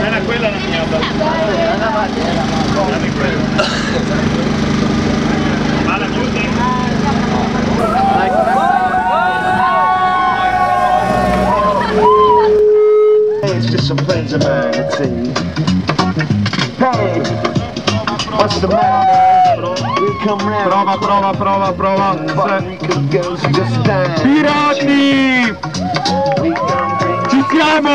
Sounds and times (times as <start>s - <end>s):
Music: 7.8s - 27.9s.